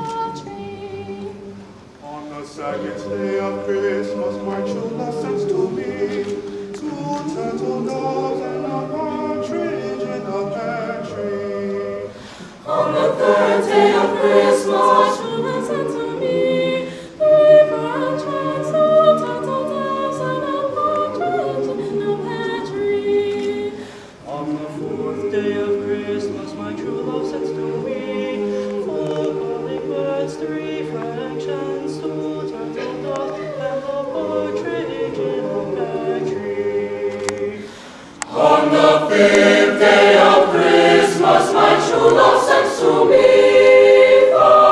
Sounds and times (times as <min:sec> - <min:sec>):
Choir: 0:00.0 - 0:44.7.